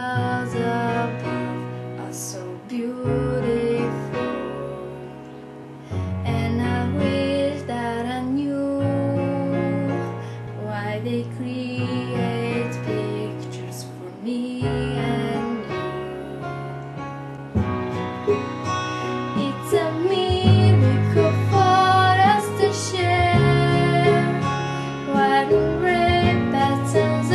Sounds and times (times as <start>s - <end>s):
Music: 0.0s - 27.3s.